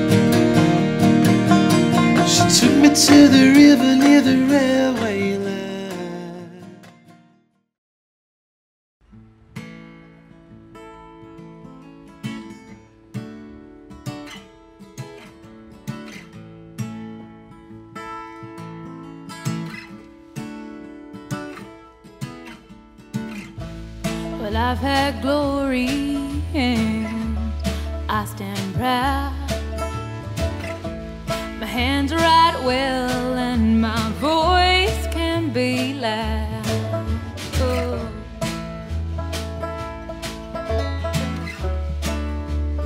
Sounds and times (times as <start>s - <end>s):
Music: 0.0s - 7.7s, 9.0s - 42.8s.